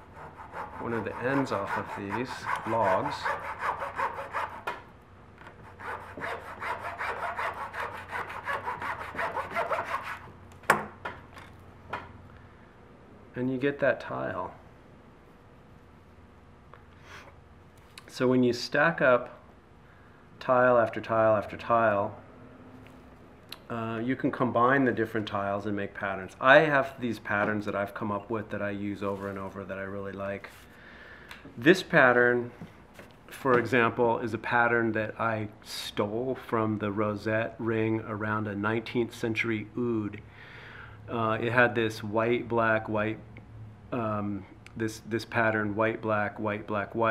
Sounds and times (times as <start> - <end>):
Speech: 0.8 - 3.4, 13.4 - 14.6, 18.0 - 19.4, 20.4 - 22.2, 23.7 - 30.5, 31.6 - 32.5, 33.3 - 40.2, 41.1 - 43.2, 44.0 - 47.1.